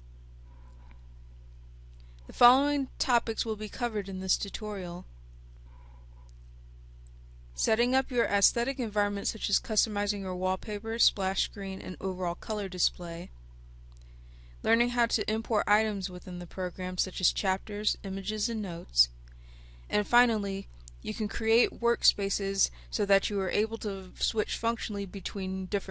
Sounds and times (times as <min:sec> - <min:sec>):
Speech: 0:02.3 - 0:05.1, 0:07.6 - 0:13.3, 0:14.7 - 0:19.2, 0:19.9 - 0:25.9.